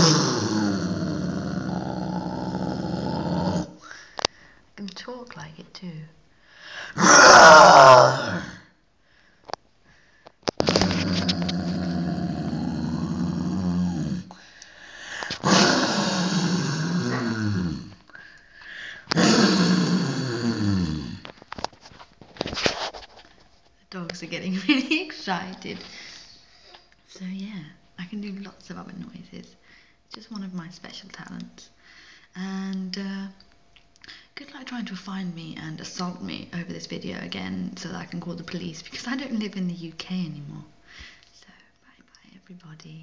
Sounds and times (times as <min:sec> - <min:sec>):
Growling: 0:00.0 - 0:03.8, 0:07.0 - 0:08.7, 0:10.6 - 0:14.4, 0:15.2 - 0:18.0, 0:19.1 - 0:21.3
Roar: 0:00.0 - 0:03.8, 0:07.0 - 0:08.7, 0:10.6 - 0:14.4, 0:15.4 - 0:18.0, 0:19.2 - 0:21.3.